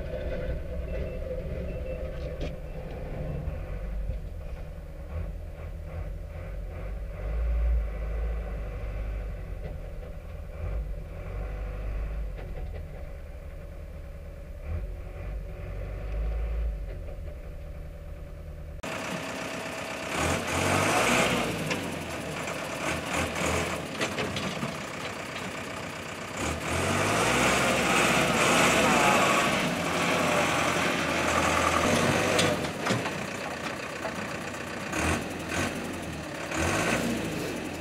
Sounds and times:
Outside, rural or natural: 0.0 - 37.8
Truck: 0.0 - 37.8.

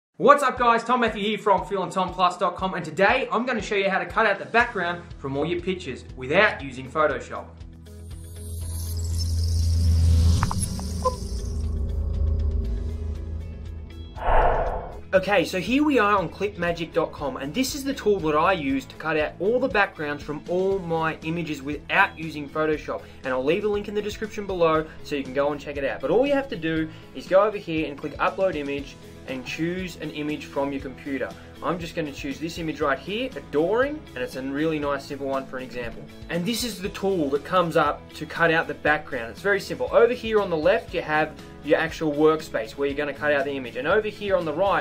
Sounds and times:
Speech: 0.2 - 7.5, 15.2 - 44.8
Music: 0.2 - 44.8.

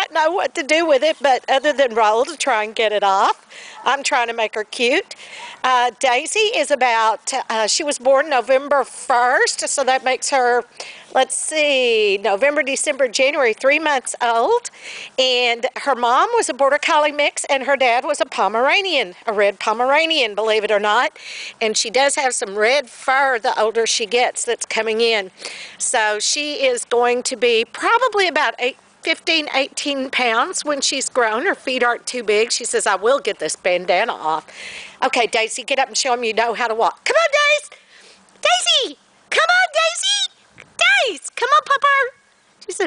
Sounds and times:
Dog: 5.3 - 5.7.

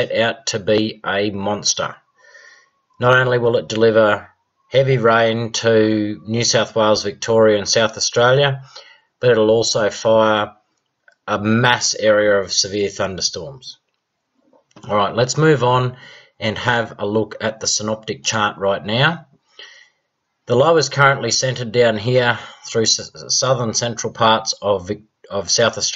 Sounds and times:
Speech: 0.0 - 2.0, 3.0 - 10.6, 11.3 - 13.8, 14.8 - 19.3, 20.5 - 25.9.

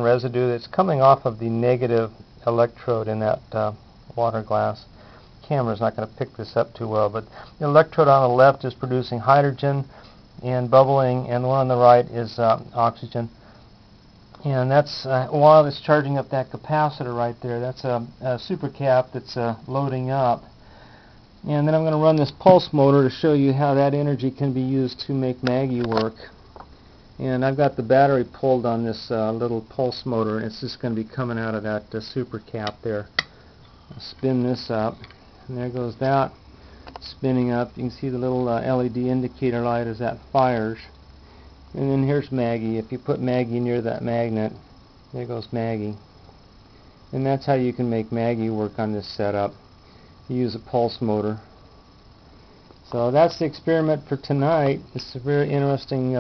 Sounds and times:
Speech: 0.0 - 13.4, 14.4 - 20.5, 21.4 - 26.4, 27.2 - 33.1, 33.9 - 36.4, 37.0 - 41.0, 41.8 - 46.0, 47.1 - 49.6, 50.3 - 51.5, 52.9 - 56.2.

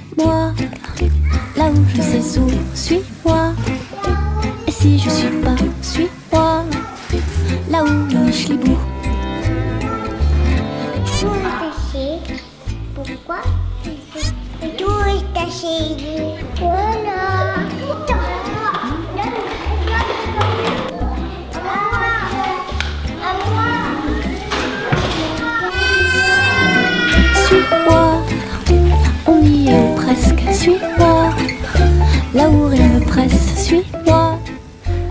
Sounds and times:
Music: 0.0 - 35.1
Speech: 11.0 - 12.4.

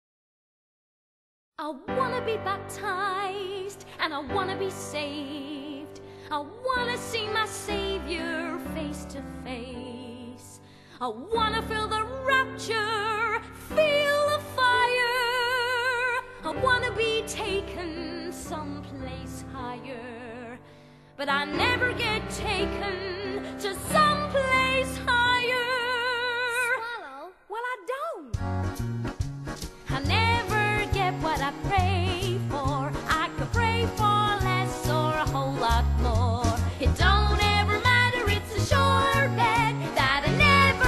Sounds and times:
Music: 1.6 - 40.8.

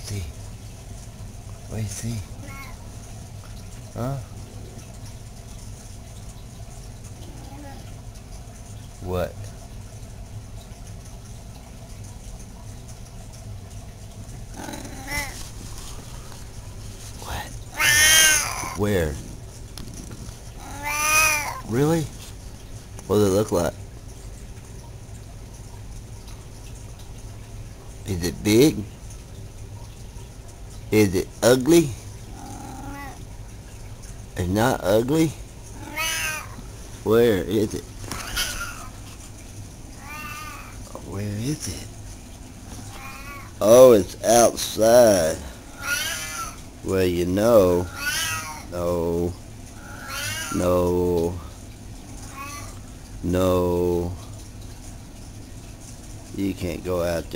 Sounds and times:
Speech: 0.0 - 0.4, 1.7 - 2.3, 4.0 - 4.3, 9.0 - 9.5, 18.8 - 19.2, 21.6 - 22.1, 23.1 - 23.8, 28.0 - 28.9, 30.9 - 32.0, 34.4 - 35.4, 37.0 - 37.9, 40.9 - 41.9, 43.6 - 45.5, 46.8 - 47.9, 48.7 - 49.4, 50.5 - 51.5, 53.2 - 54.2, 56.3 - 57.3
Meow: 17.8 - 18.8, 20.6 - 21.6, 35.8 - 36.6, 40.0 - 40.7, 42.9 - 43.5, 45.8 - 46.6, 47.9 - 48.6, 49.8 - 50.6, 52.3 - 52.8.

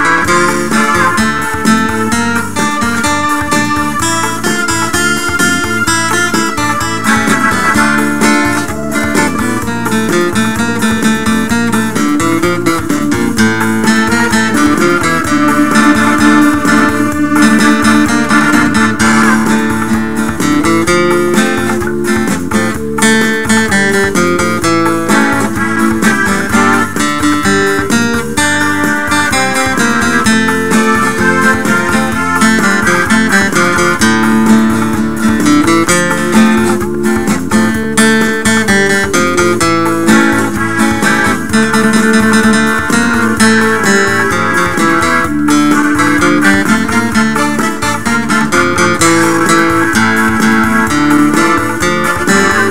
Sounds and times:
Music: 0.0 - 52.7.

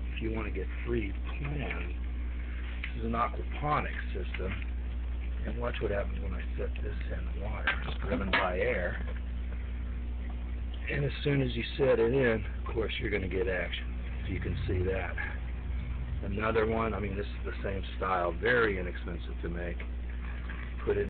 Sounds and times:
Speech: 0.2 - 2.0, 2.9 - 4.6, 5.4 - 9.1, 10.8 - 15.4, 16.2 - 19.8, 20.8 - 21.1.

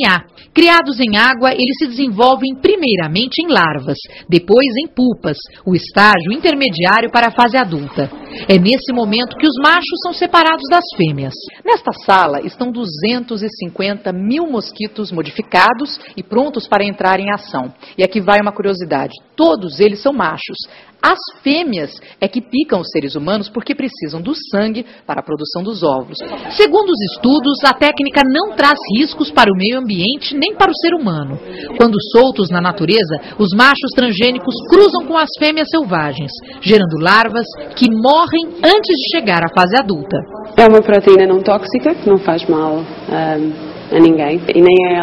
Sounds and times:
Speech: 0.0 - 45.0.

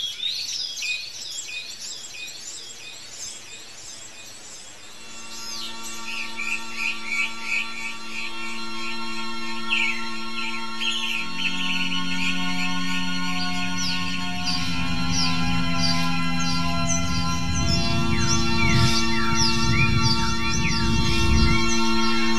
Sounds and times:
Musical instrument: 5.0 - 22.3.

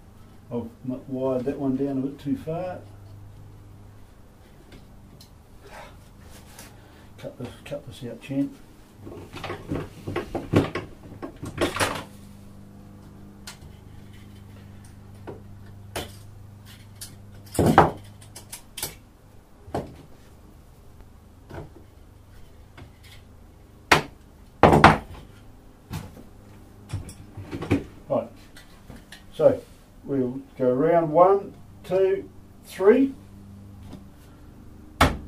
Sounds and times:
Tools: 16.0 - 19.0.

